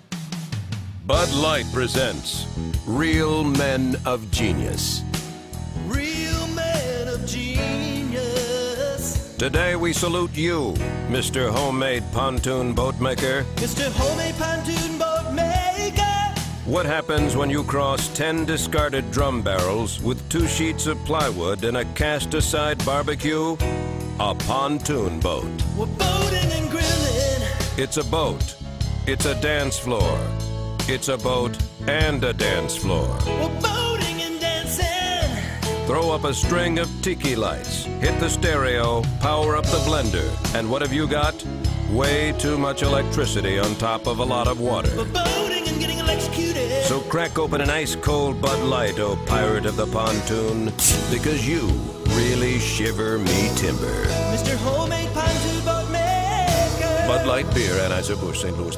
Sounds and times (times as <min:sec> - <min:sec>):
Music: 0:00.0 - 0:58.7
Speech: 0:01.1 - 0:05.1, 0:09.0 - 0:14.4, 0:16.7 - 0:23.6, 0:24.2 - 0:27.0, 0:27.8 - 0:33.5, 0:35.9 - 0:55.4, 0:57.0 - 0:58.7.